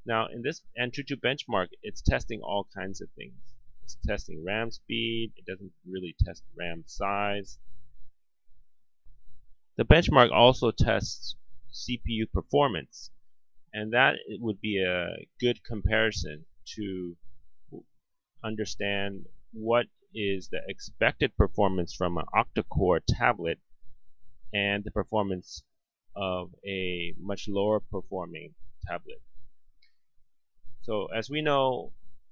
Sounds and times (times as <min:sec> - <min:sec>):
Speech: 0:00.0 - 0:07.6, 0:09.8 - 0:17.2, 0:17.8 - 0:23.6, 0:24.5 - 0:29.2, 0:30.8 - 0:32.0
Inside, small room: 0:00.0 - 0:32.3.